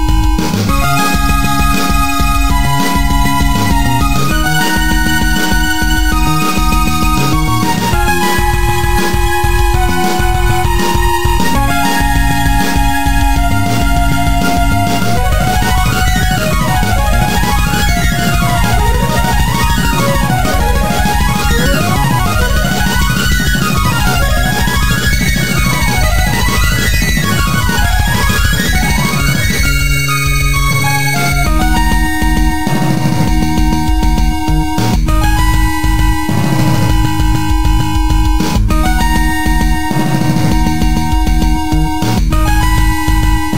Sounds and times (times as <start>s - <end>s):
Music: 0.0s - 43.5s.